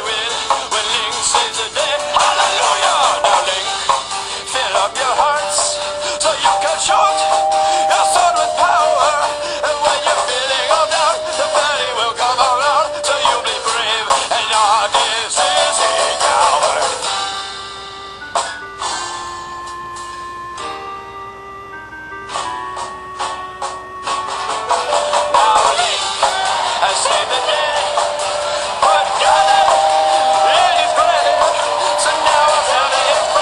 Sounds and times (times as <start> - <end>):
Music: 0.0 - 33.4.